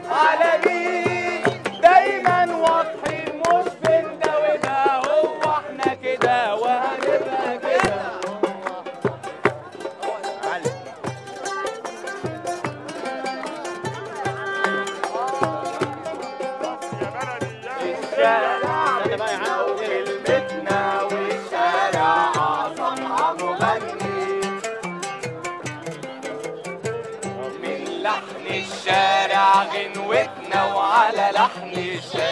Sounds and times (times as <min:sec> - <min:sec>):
Music: 0:00.0 - 0:32.3.